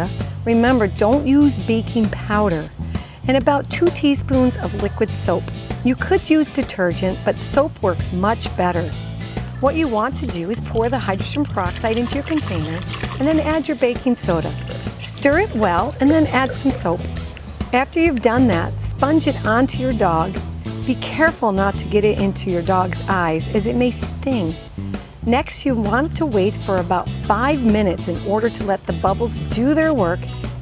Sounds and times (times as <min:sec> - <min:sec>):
Speech: 0:00.0 - 0:02.7, 0:03.3 - 0:08.9, 0:09.6 - 0:17.1, 0:17.8 - 0:24.6, 0:25.2 - 0:30.3
Music: 0:00.0 - 0:30.6.